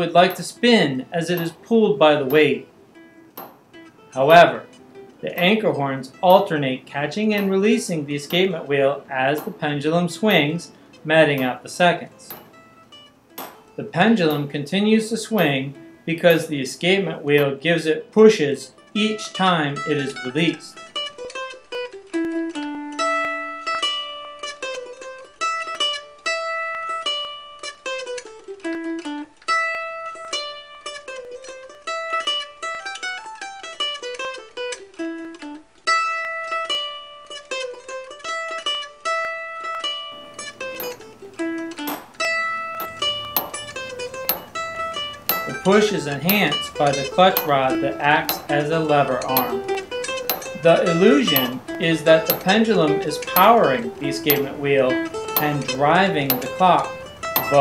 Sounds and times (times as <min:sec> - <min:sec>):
Speech: 0:00.0 - 0:02.7, 0:04.2 - 0:12.3, 0:13.8 - 0:20.8, 0:45.5 - 0:49.7, 0:50.6 - 0:56.9
Music: 0:00.0 - 0:57.6.